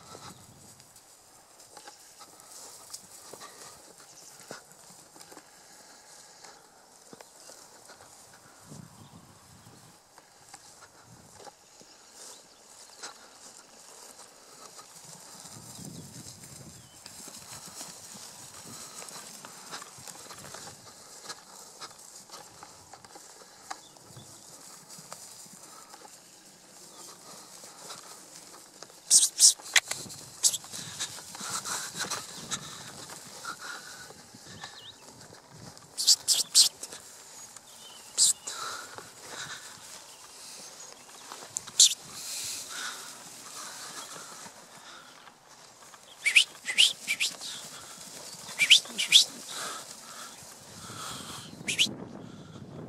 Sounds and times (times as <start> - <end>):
Animal: 10.4 - 51.9.